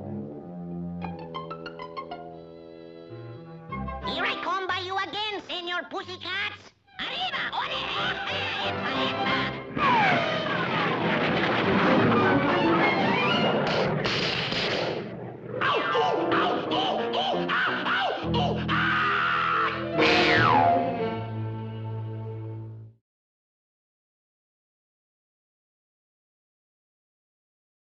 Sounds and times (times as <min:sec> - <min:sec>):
Music: 0:00.0 - 0:05.0, 0:06.8 - 0:09.8, 0:11.9 - 0:13.6, 0:15.7 - 0:23.0.